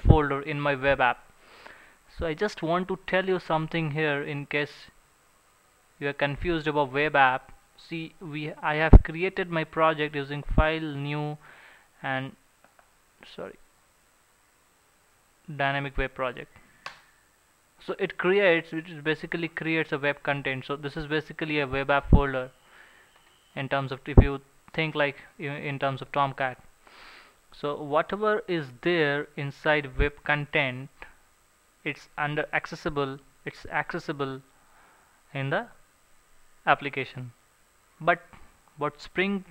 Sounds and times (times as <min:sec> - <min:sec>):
Speech: 0:00.0 - 0:01.2, 0:02.1 - 0:05.0, 0:06.0 - 0:11.4, 0:12.0 - 0:12.4, 0:13.2 - 0:13.6, 0:15.5 - 0:16.5, 0:17.8 - 0:22.5, 0:23.6 - 0:26.7, 0:27.5 - 0:31.2, 0:31.8 - 0:34.5, 0:35.3 - 0:35.8, 0:36.6 - 0:37.4, 0:38.0 - 0:39.5.